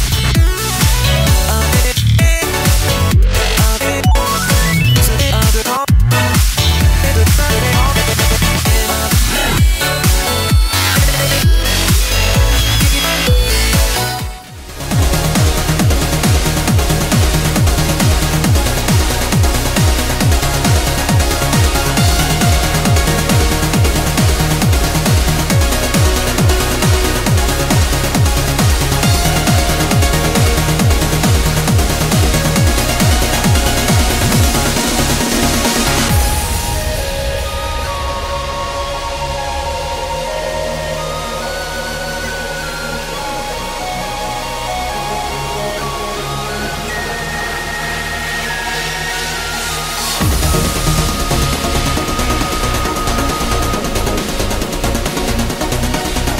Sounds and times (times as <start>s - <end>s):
Music: 0.0s - 56.3s.